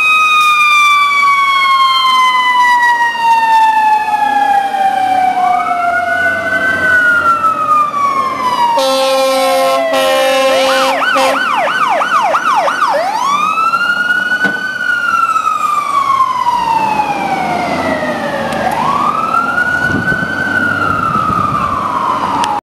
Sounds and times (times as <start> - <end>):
Vehicle: 0.0 - 22.6.